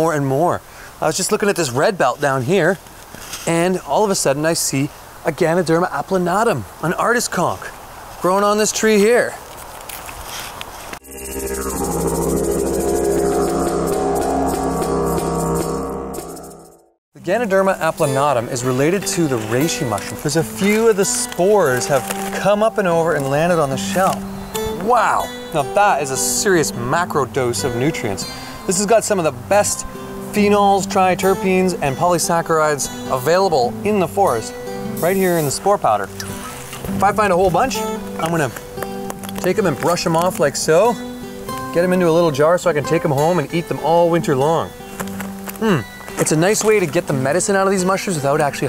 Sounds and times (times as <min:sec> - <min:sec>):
Speech: 0:00.0 - 0:02.8, 0:03.5 - 0:09.4, 0:17.2 - 0:24.2, 0:24.8 - 0:36.1, 0:37.0 - 0:38.6, 0:39.4 - 0:41.0, 0:41.7 - 0:44.7, 0:45.6 - 0:48.6
Music: 0:11.0 - 0:48.6.